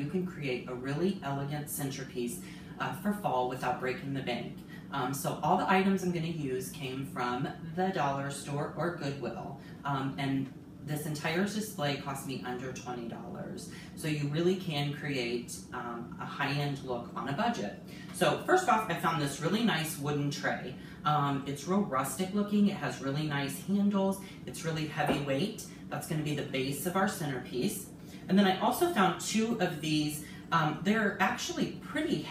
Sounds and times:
Speech: 0:00.0 - 0:32.3.

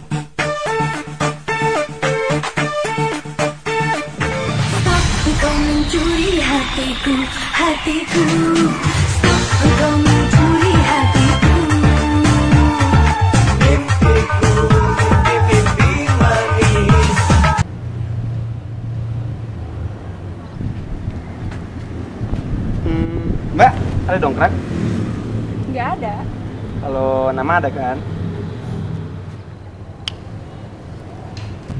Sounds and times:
Music: 0:00.0 - 0:17.6.

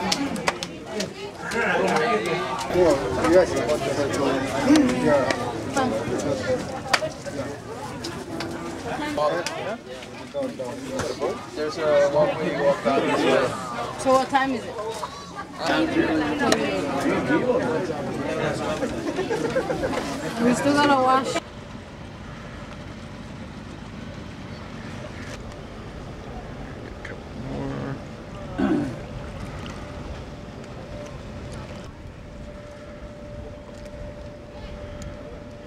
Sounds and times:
Outside, rural or natural: 0:00.0 - 0:35.6.

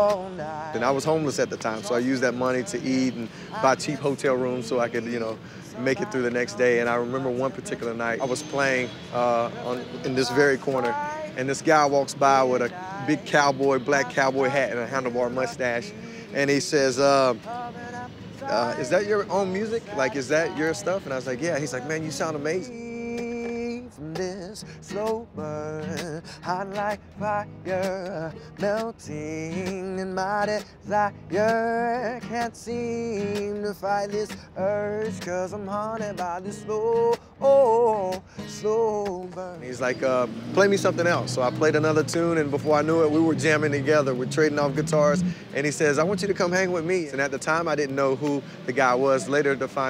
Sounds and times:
Speech: 0:00.8 - 0:17.4, 0:18.5 - 0:22.8, 0:39.6 - 0:49.9.

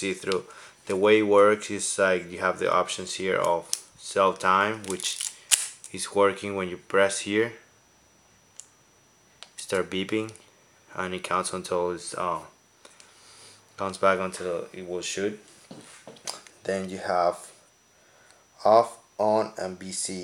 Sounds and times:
Speech: 0:00.0 - 0:05.2, 0:05.9 - 0:07.7, 0:09.6 - 0:12.6, 0:13.8 - 0:15.4, 0:16.6 - 0:17.5, 0:18.6 - 0:20.2.

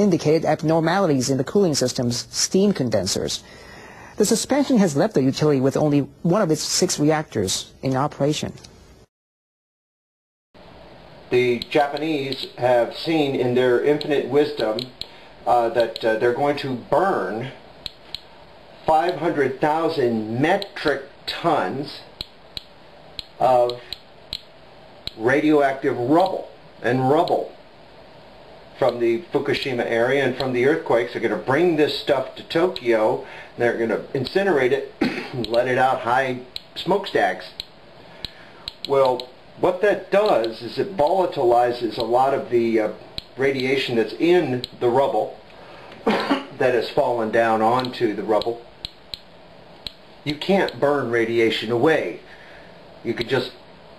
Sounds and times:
Speech: 0:00.0 - 0:03.4, 0:04.2 - 0:08.6, 0:11.3 - 0:17.6, 0:18.9 - 0:22.1, 0:23.4 - 0:23.9, 0:25.2 - 0:27.6, 0:28.8 - 0:37.6, 0:38.9 - 0:45.4, 0:46.1 - 0:48.7, 0:50.2 - 0:52.3, 0:53.0 - 0:53.6.

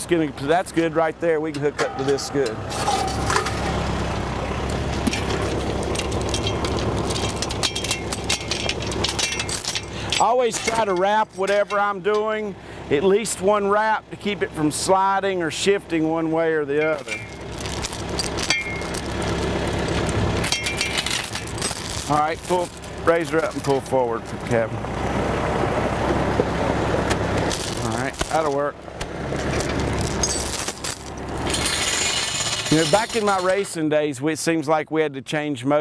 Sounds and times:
Speech: 0:00.0 - 0:02.6, 0:10.2 - 0:17.2, 0:22.1 - 0:24.8, 0:27.8 - 0:28.8, 0:32.7 - 0:35.8
Outside, rural or natural: 0:00.0 - 0:35.8
Vehicle: 0:00.0 - 0:35.8.

